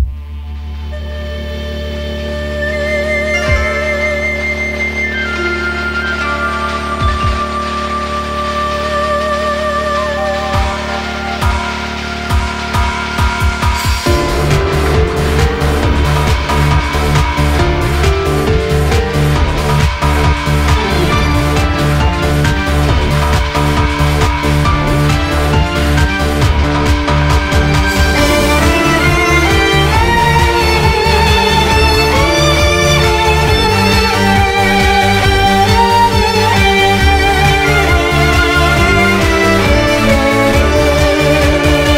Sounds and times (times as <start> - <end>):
Violin, fiddle: 24.1 - 41.9.